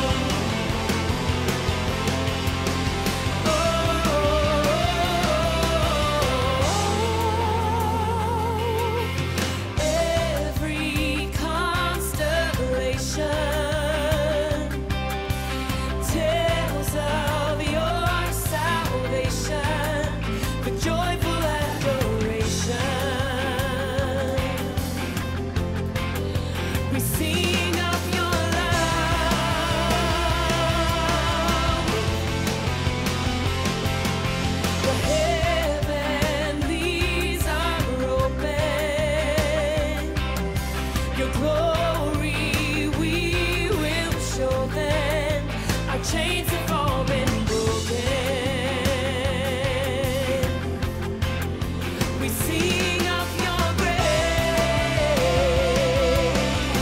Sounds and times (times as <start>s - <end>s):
Funk: 0.0s - 56.8s
Jazz: 0.0s - 56.8s.